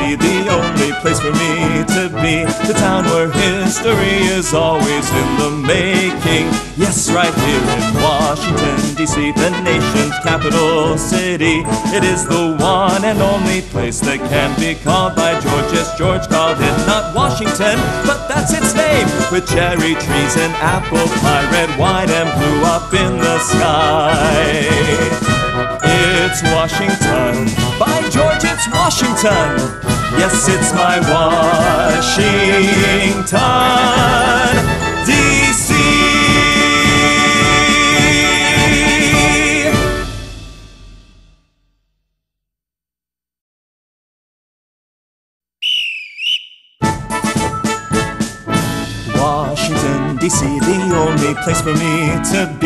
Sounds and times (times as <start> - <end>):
Music: 0.0 - 41.9, 46.8 - 52.6.